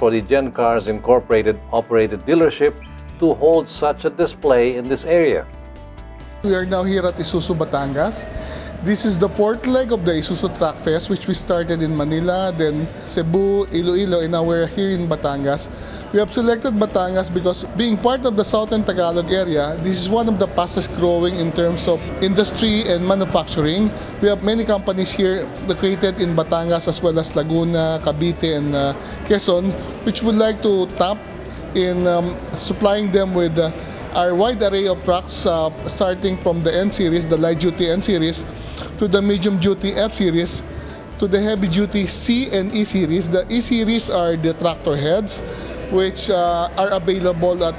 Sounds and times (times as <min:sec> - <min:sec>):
Speech: 0:00.0 - 0:05.4, 0:06.4 - 0:40.6, 0:41.2 - 0:47.7
Music: 0:00.0 - 0:47.7.